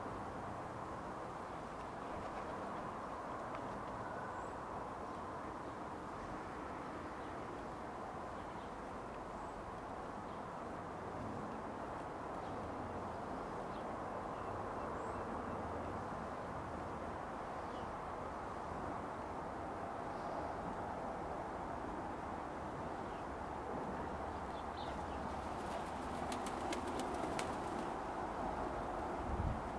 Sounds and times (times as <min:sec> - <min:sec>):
Outside, rural or natural: 0:00.0 - 0:29.7.